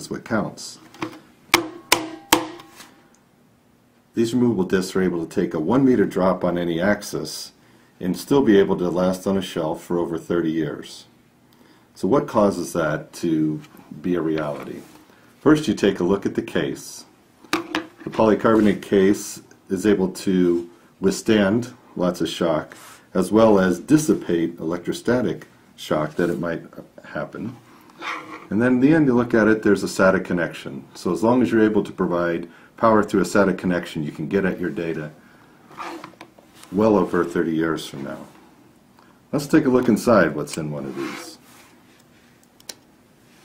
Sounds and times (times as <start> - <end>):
Speech: 0.0 - 0.9, 4.1 - 11.2, 12.0 - 17.2, 18.1 - 27.6, 28.5 - 35.2, 36.6 - 38.4, 39.3 - 41.5.